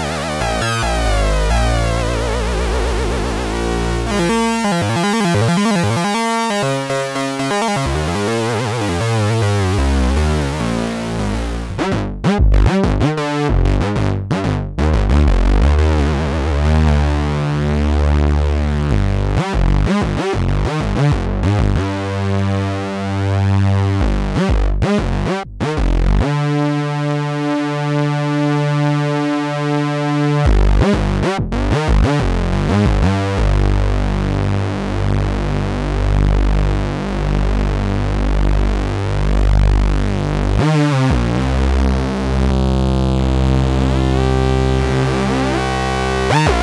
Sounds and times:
Sampler: 0:00.0 - 0:12.0, 0:43.5 - 0:46.6.

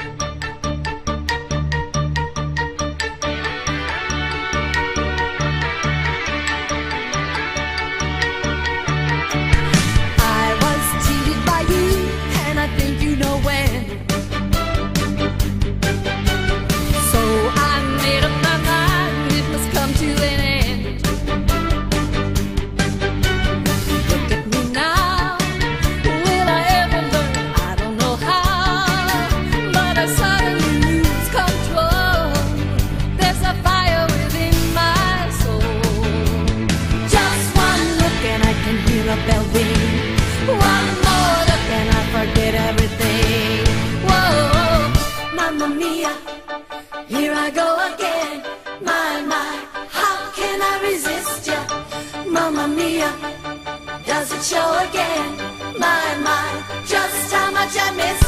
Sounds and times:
Music: 0:00.0 - 0:58.2.

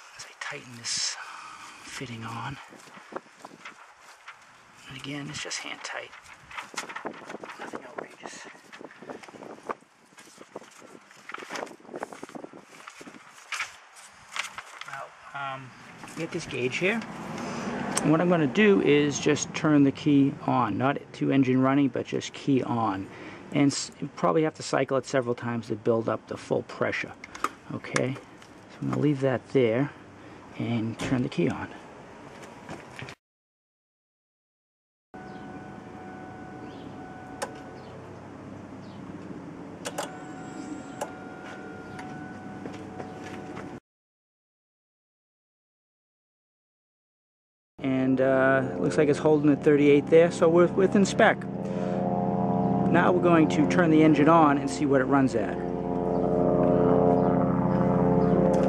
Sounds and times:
Speech: 0:00.2 - 0:01.3, 0:01.9 - 0:02.7, 0:04.8 - 0:06.2, 0:07.6 - 0:08.6, 0:14.9 - 0:17.1, 0:18.0 - 0:30.0, 0:30.6 - 0:31.8, 0:47.8 - 0:51.5, 0:52.9 - 0:55.6.

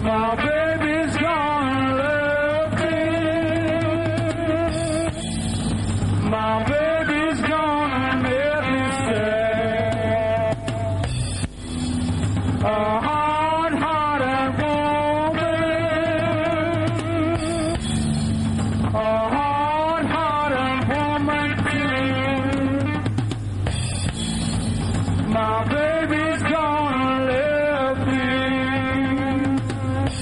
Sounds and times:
Singing: 0:00.0 - 0:05.2, 0:06.2 - 0:11.1, 0:12.6 - 0:17.8, 0:18.9 - 0:23.1, 0:25.3 - 0:30.2
Blues: 0:00.0 - 0:30.2
Guitar: 0:00.0 - 0:30.2.

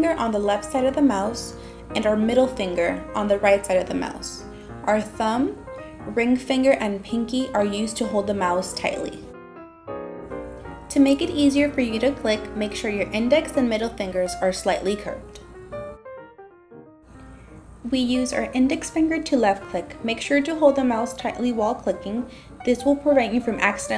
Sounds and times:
Speech: 0:00.0 - 0:09.3, 0:10.9 - 0:15.4, 0:17.9 - 0:23.9
Music: 0:00.0 - 0:23.9.

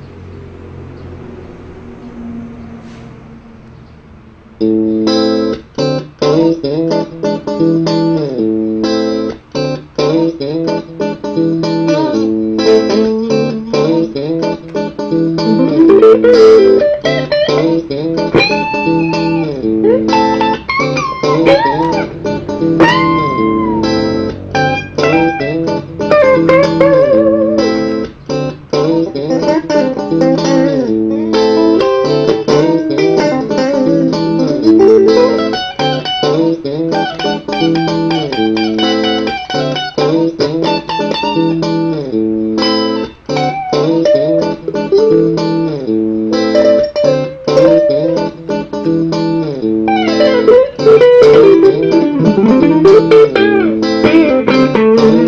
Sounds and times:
Music: 0:04.6 - 0:55.2.

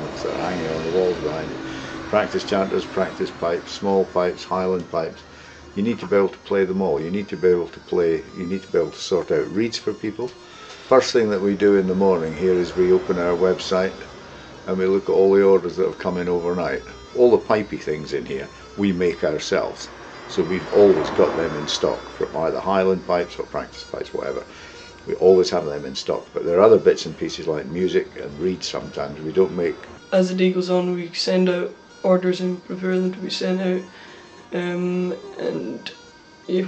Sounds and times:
Speech: 0:00.0 - 0:05.2, 0:05.8 - 0:14.0, 0:14.7 - 0:33.9, 0:34.6 - 0:36.6
Bagpipes: 0:00.0 - 0:36.6.

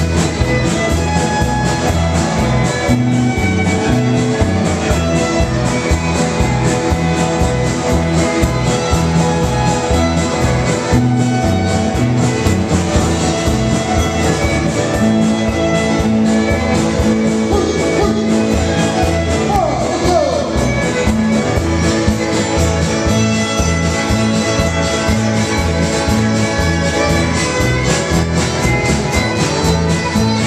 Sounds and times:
Violin, fiddle: 0:00.0 - 0:30.4.

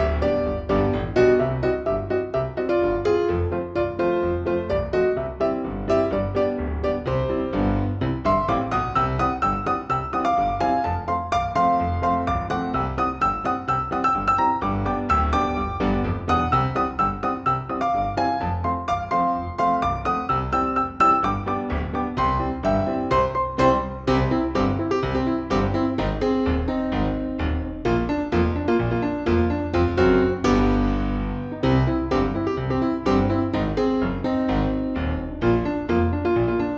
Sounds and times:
Music: 0:00.0 - 0:36.7.

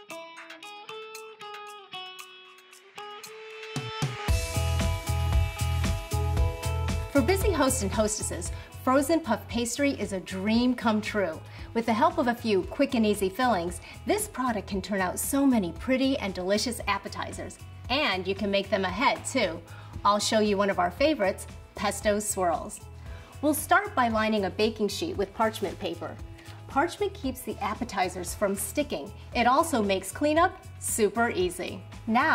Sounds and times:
Music: 0:00.0 - 0:32.3
Speech: 0:07.2 - 0:22.8, 0:23.4 - 0:32.3.

